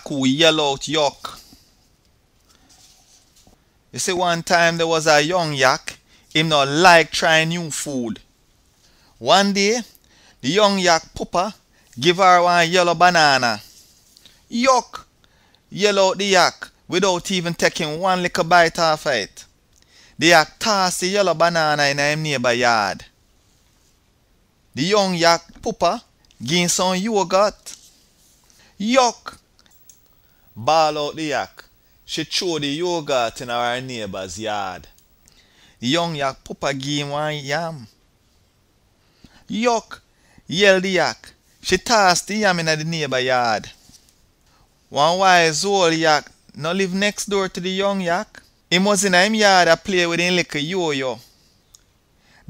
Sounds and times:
Speech: 0:00.0 - 0:01.5, 0:03.9 - 0:08.3, 0:09.2 - 0:13.7, 0:14.5 - 0:15.1, 0:15.7 - 0:19.6, 0:20.2 - 0:23.2, 0:24.8 - 0:27.8, 0:28.8 - 0:29.4, 0:30.6 - 0:34.9, 0:35.8 - 0:38.0, 0:39.5 - 0:43.8, 0:44.9 - 0:51.3.

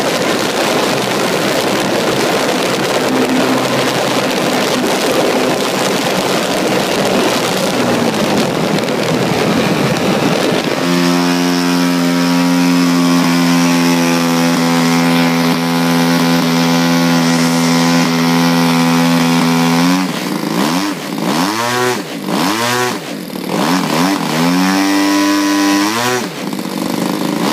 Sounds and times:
Engine: 0:00.0 - 0:27.5.

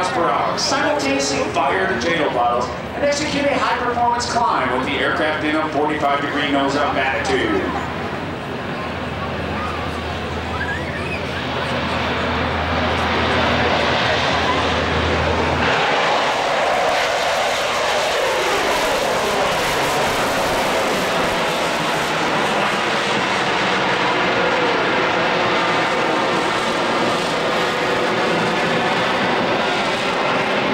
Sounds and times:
Fixed-wing aircraft, airplane: 0:00.0 - 0:30.7.

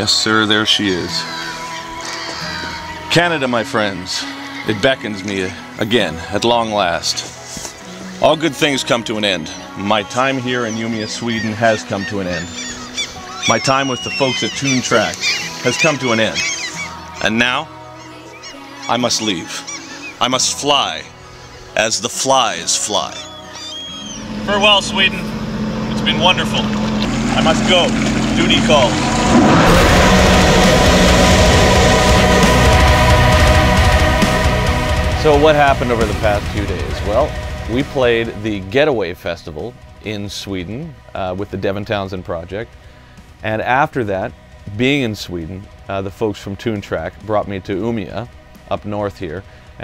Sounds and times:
Speech: 0:00.0 - 0:01.2, 0:03.1 - 0:07.3, 0:08.2 - 0:12.5, 0:13.5 - 0:16.5, 0:17.2 - 0:17.7, 0:18.9 - 0:21.1, 0:21.8 - 0:23.3, 0:24.5 - 0:25.2, 0:25.9 - 0:26.7, 0:27.4 - 0:28.9, 0:35.2 - 0:42.7, 0:43.4 - 0:49.8
Music: 0:00.0 - 0:49.8.

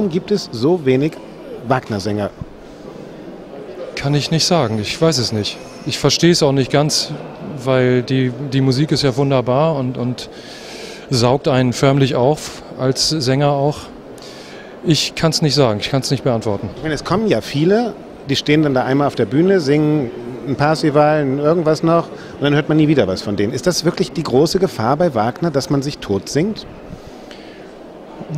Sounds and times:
Speech: 0:00.0 - 0:02.4, 0:04.0 - 0:10.3, 0:11.1 - 0:13.9, 0:14.8 - 0:26.7.

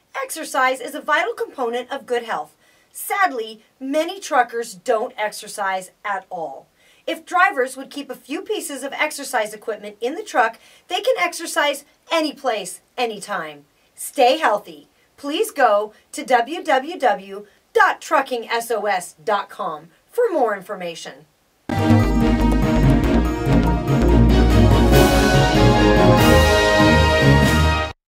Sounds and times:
Speech: 0:00.1 - 0:21.3
Music: 0:21.7 - 0:28.0.

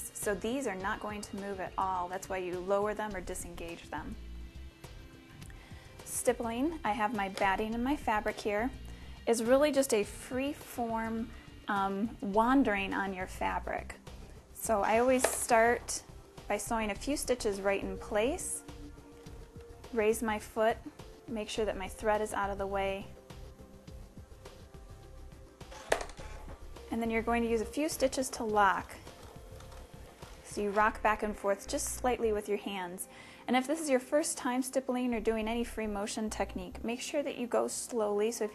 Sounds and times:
Speech: 0:00.0 - 0:04.2, 0:06.1 - 0:14.0, 0:14.6 - 0:18.6, 0:20.0 - 0:23.2, 0:26.9 - 0:29.0, 0:30.5 - 0:38.5
Music: 0:00.0 - 0:38.5.

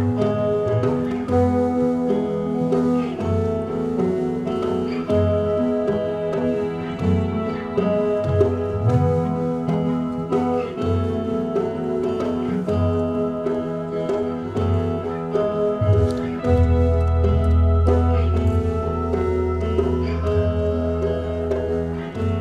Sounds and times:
Music: 0:00.0 - 0:22.4.

